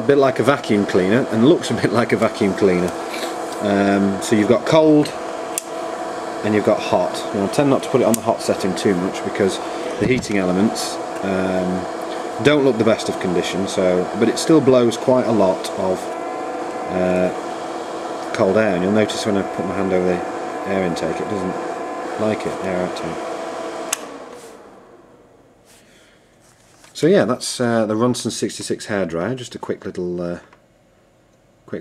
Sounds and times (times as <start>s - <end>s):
Speech: 0.0s - 3.0s, 3.6s - 5.2s, 6.4s - 16.1s, 16.9s - 17.4s, 18.3s - 21.6s, 22.2s - 23.2s, 27.0s - 30.5s.